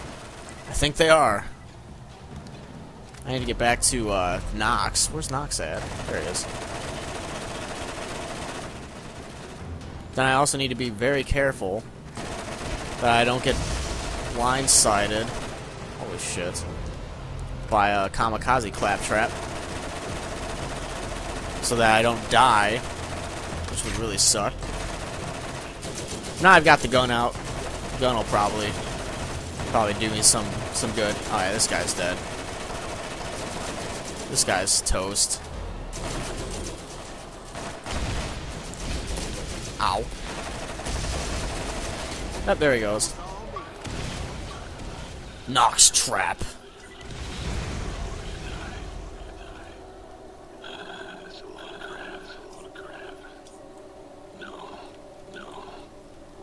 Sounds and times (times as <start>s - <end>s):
Speech: 21.6s - 22.8s, 28.0s - 28.8s, 29.7s - 32.2s, 34.3s - 35.4s, 39.8s - 40.1s, 42.5s - 43.7s, 45.5s - 46.6s.